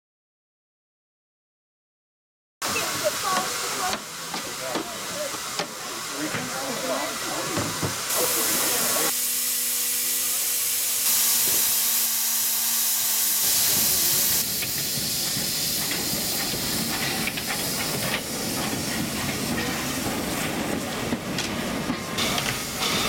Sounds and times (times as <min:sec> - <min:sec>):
Steam: 0:02.6 - 0:23.0
Train: 0:02.6 - 0:23.0.